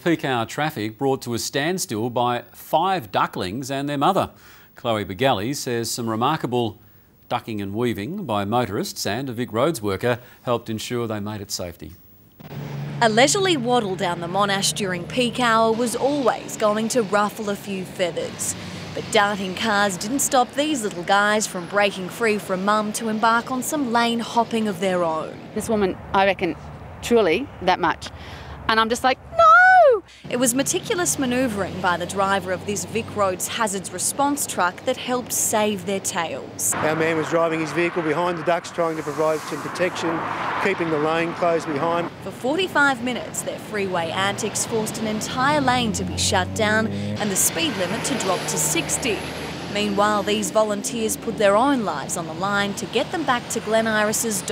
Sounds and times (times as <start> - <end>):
Speech: 0.0 - 12.0, 13.0 - 28.1, 30.3 - 49.2, 49.8 - 54.5.